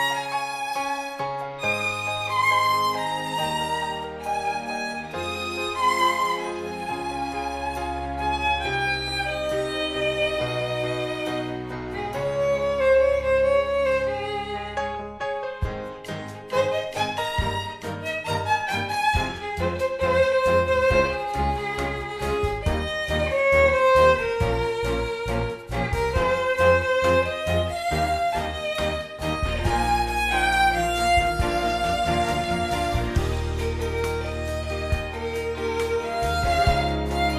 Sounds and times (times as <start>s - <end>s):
Classical music: 0.0s - 37.3s
Violin, fiddle: 0.0s - 37.3s.